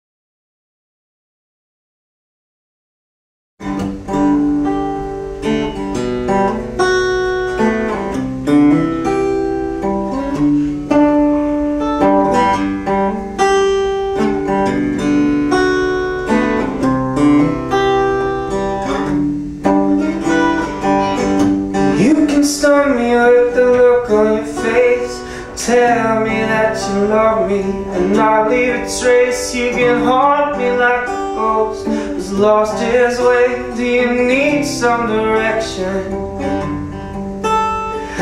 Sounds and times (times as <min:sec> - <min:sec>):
Strum: 0:03.6 - 0:38.2.